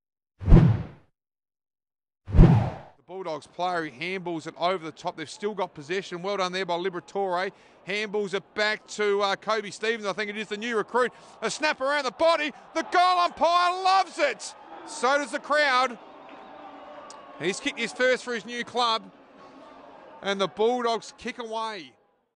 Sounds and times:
Speech: 3.1 - 16.0, 17.4 - 19.1, 20.2 - 22.0.

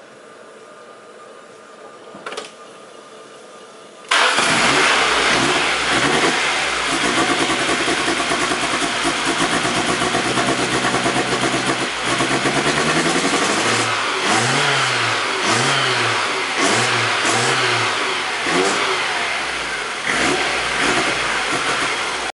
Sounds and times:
Medium engine (mid frequency): 4.1 - 22.3
Vehicle: 4.1 - 22.3
Accelerating, revving, vroom: 4.4 - 8.0, 11.4 - 22.2.

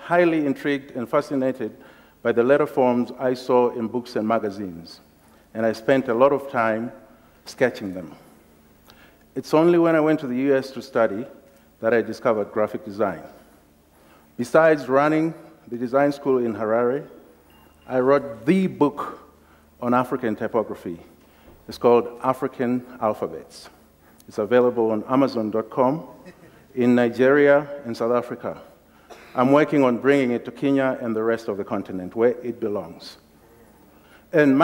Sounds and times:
Speech: 0.0 - 8.3, 9.4 - 13.4, 14.4 - 17.2, 17.9 - 26.2, 26.8 - 28.8, 29.4 - 33.3, 34.3 - 34.6.

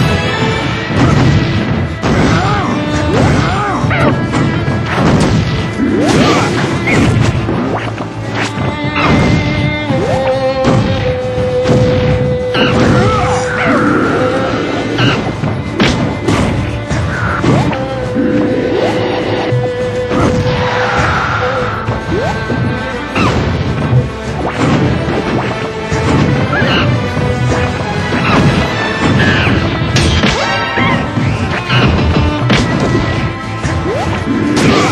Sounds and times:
Music: 0.0 - 34.9.

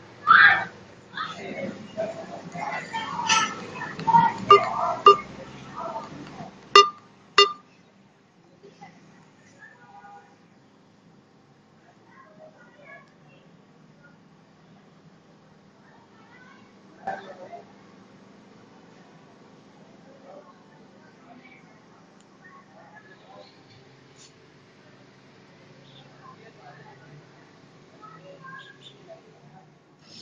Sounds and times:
Speech: 11.8 - 14.3, 15.8 - 17.8, 24.8 - 29.8.

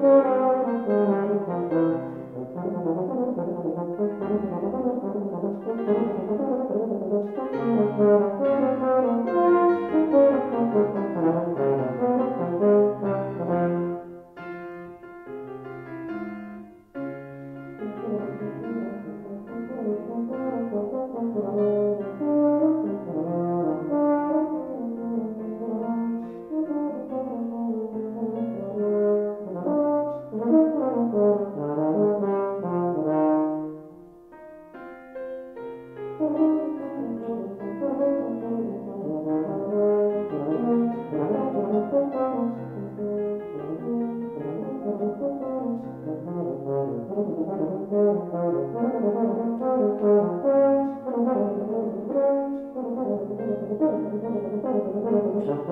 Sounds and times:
Brass instrument: 0.0 - 55.7.

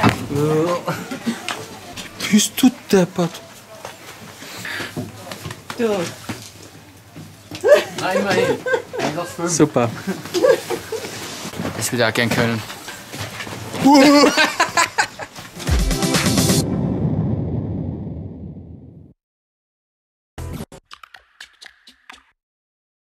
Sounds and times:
Music: 15.6 - 16.7, 20.4 - 22.4.

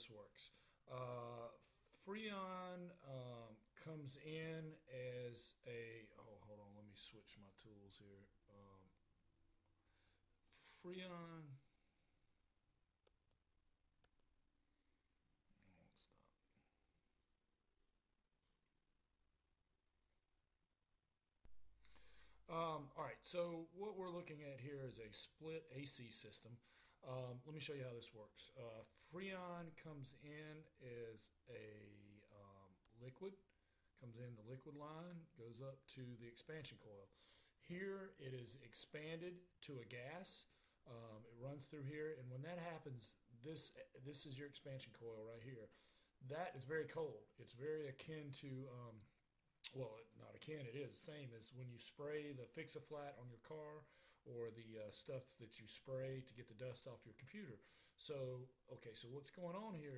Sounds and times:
Speech: 0.0 - 9.0, 10.6 - 11.7, 15.6 - 16.4, 22.5 - 59.9.

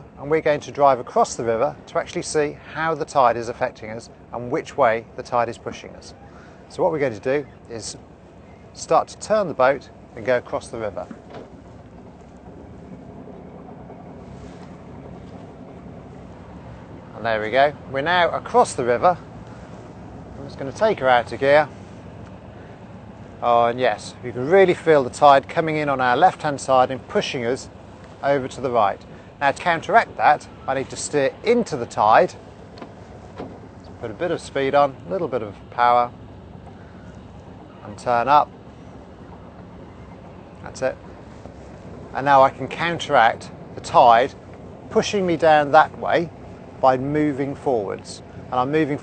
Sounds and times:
Sailboat, sailing ship: 0.0 - 49.0
Speech: 0.2 - 8.0, 8.8 - 11.1, 17.2 - 19.2, 20.4 - 21.7, 23.4 - 32.4, 34.0 - 36.1, 37.8 - 38.5, 40.6 - 41.0, 42.1 - 49.0.

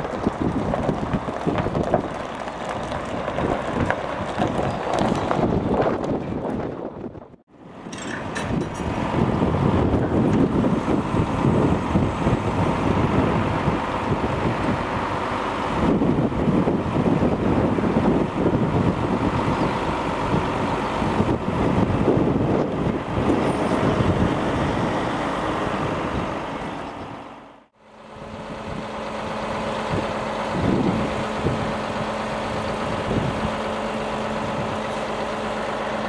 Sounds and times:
Vehicle: 0.0 - 36.0.

